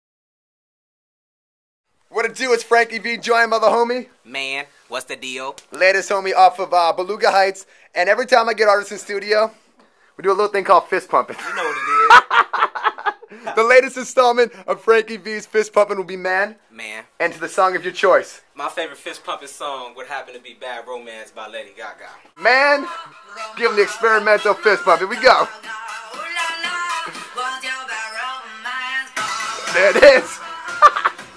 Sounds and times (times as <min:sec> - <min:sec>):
Inside, small room: 0:01.9 - 0:31.3
Speech: 0:02.1 - 0:09.6, 0:10.2 - 0:11.3, 0:23.6 - 0:25.5.